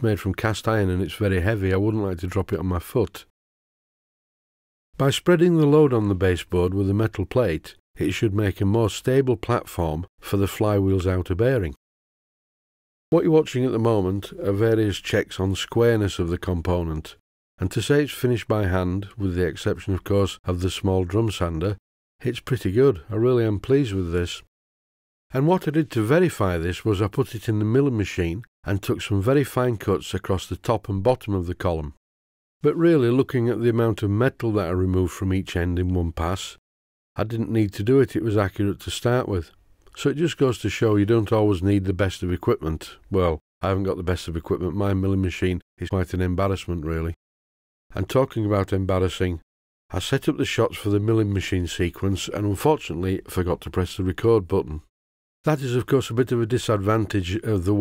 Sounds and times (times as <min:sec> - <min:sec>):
Speech: 0:00.0 - 0:03.3, 0:05.0 - 0:11.8, 0:13.1 - 0:24.5, 0:25.3 - 0:32.0, 0:32.6 - 0:36.6, 0:37.2 - 0:47.2, 0:47.9 - 0:54.9, 0:55.5 - 0:57.8.